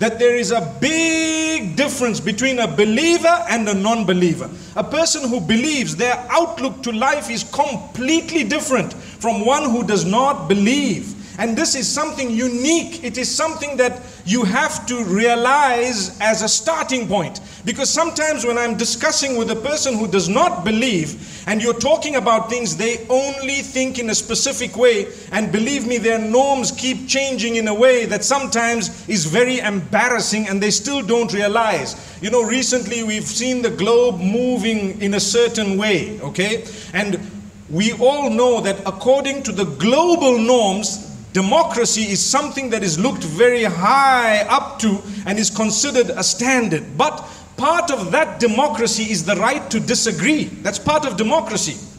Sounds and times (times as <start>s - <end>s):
Male speech, man speaking: 0.0s - 51.9s
Narration, monologue: 0.0s - 51.9s.